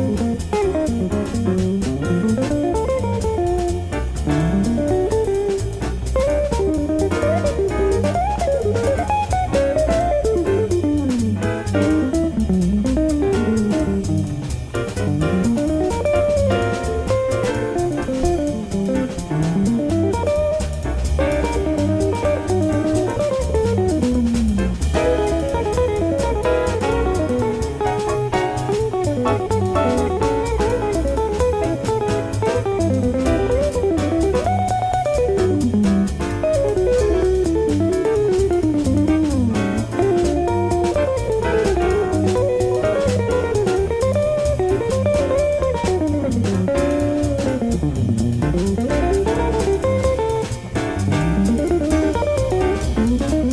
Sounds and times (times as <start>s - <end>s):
Strum: 0.0s - 53.5s.